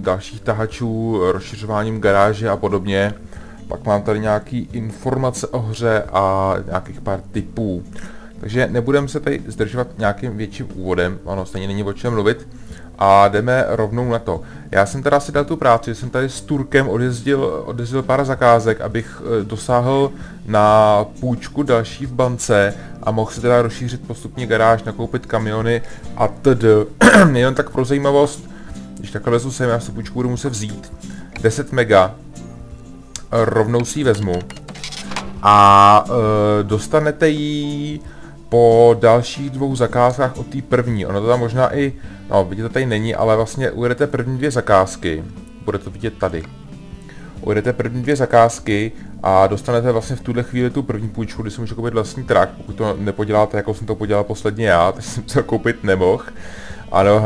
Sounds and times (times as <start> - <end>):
Speech: 0.0 - 28.4, 29.0 - 32.2, 33.2 - 34.5, 35.4 - 46.5, 47.4 - 56.3, 56.9 - 57.2
Music: 0.0 - 57.2.